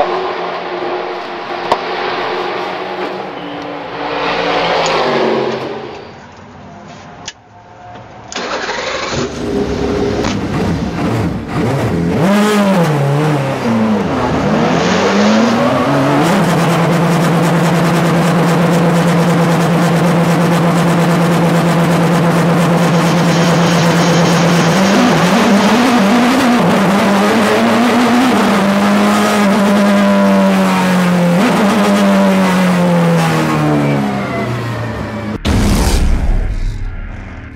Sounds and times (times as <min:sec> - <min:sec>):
Car: 0:00.0 - 0:37.5.